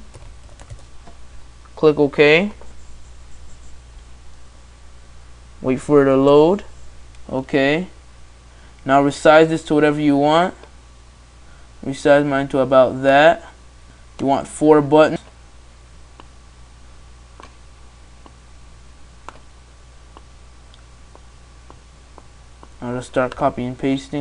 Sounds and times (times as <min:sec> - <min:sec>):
Speech: 0:01.8 - 0:02.6, 0:05.6 - 0:08.0, 0:08.8 - 0:10.6, 0:11.8 - 0:13.6, 0:14.2 - 0:15.3, 0:22.8 - 0:24.2.